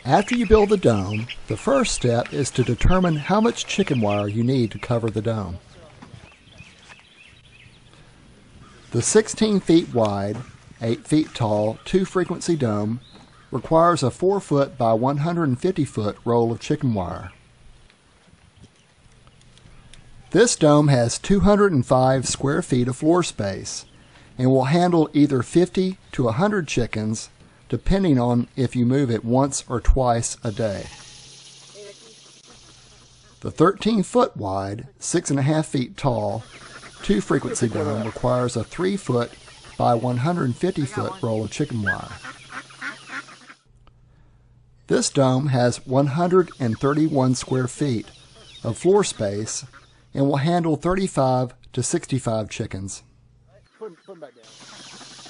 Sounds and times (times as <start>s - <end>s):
Speech: 0.0s - 6.1s, 8.9s - 17.4s, 20.3s - 30.9s, 33.4s - 42.2s, 44.9s - 54.5s.